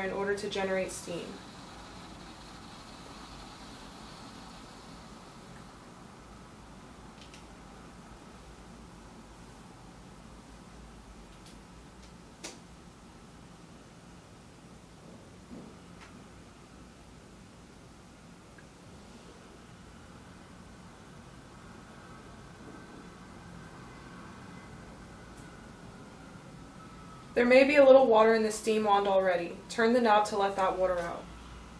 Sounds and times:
Silence: 0:01.1 - 0:27.4.

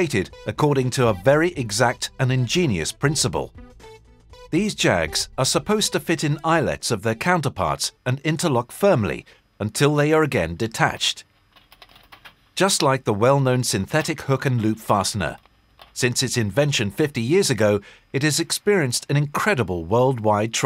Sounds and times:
Narration, monologue: 0:00.0 - 0:20.6.

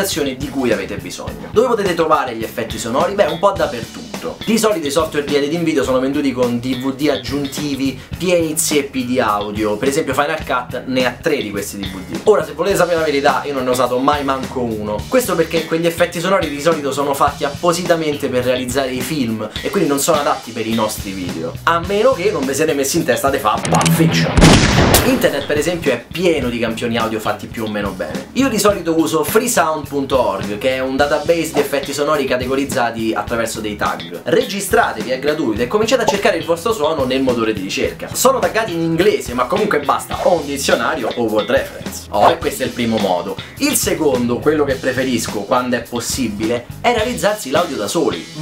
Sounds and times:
Speech: 0:00.0 - 0:24.4, 0:25.0 - 0:48.4
Music: 0:00.0 - 0:48.4.

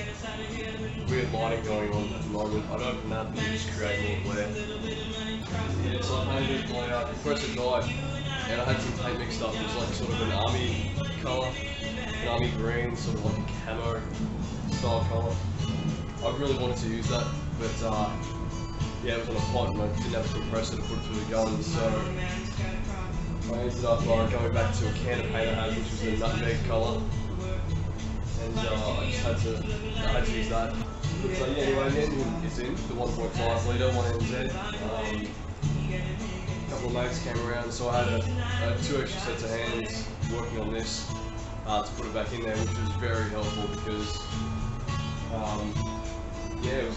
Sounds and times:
Music: 0:00.0 - 0:46.9
Speech: 0:01.1 - 0:04.6, 0:05.5 - 0:11.6, 0:12.2 - 0:14.1, 0:14.7 - 0:15.4, 0:16.2 - 0:18.2, 0:19.0 - 0:22.2, 0:23.5 - 0:27.1, 0:28.4 - 0:35.4, 0:36.7 - 0:41.1, 0:41.7 - 0:44.3, 0:45.3 - 0:45.8, 0:46.6 - 0:46.9.

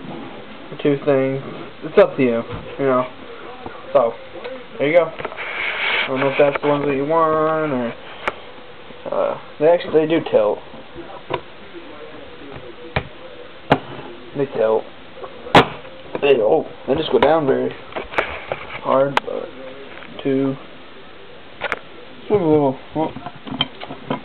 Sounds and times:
Speech: 0:09.1 - 0:13.4, 0:18.8 - 0:20.6.

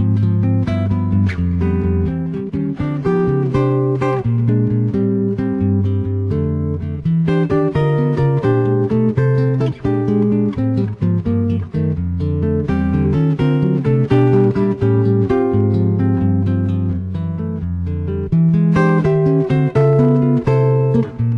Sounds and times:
Acoustic guitar: 0:00.0 - 0:21.3
Electric guitar: 0:00.0 - 0:21.3
Strum: 0:00.0 - 0:21.3.

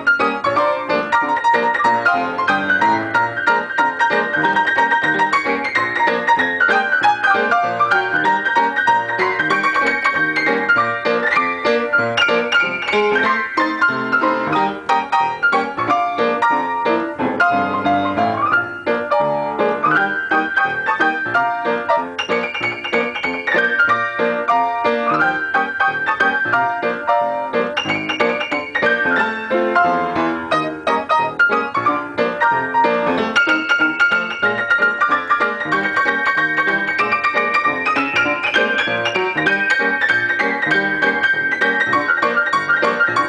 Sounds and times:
Music: 0:00.0 - 0:43.2.

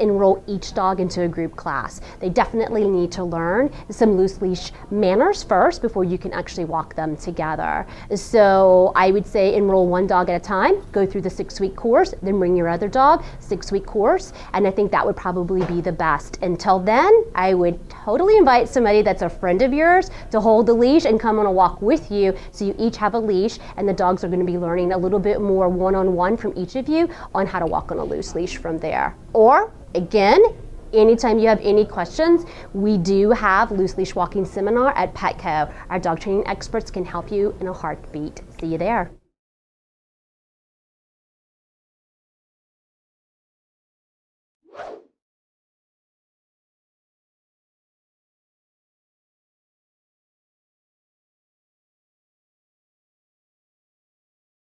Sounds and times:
Speech: 0:00.0 - 0:39.2.

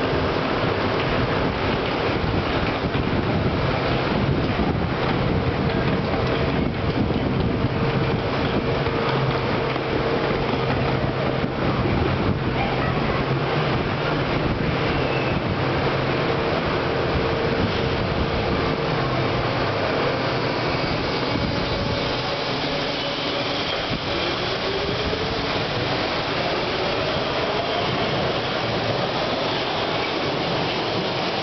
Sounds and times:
Railroad car, train wagon: 0:00.0 - 0:31.4
Subway, metro, underground: 0:00.0 - 0:31.4
Train: 0:00.0 - 0:31.4.

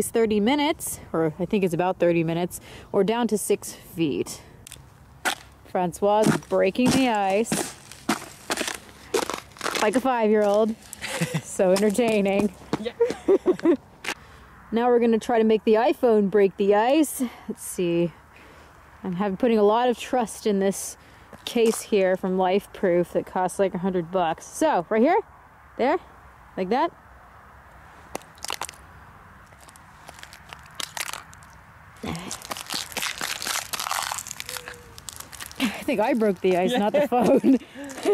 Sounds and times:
Speech: 0:35.6 - 0:37.6.

